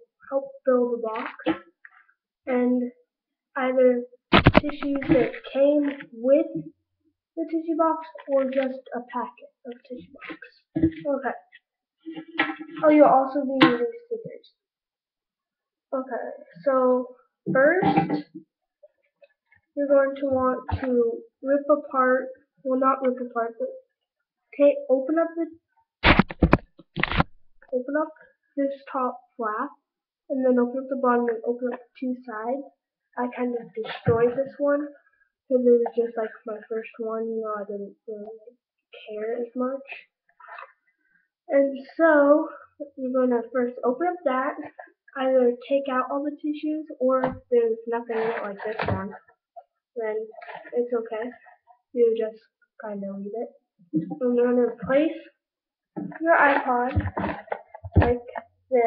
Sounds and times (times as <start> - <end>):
Speech: 0.0 - 1.6, 2.5 - 3.0, 3.6 - 6.7, 7.4 - 11.5, 12.2 - 14.6, 15.9 - 18.3, 19.8 - 23.8, 24.6 - 25.5, 27.7 - 40.7, 41.5 - 49.2, 50.0 - 55.3, 56.0 - 58.8.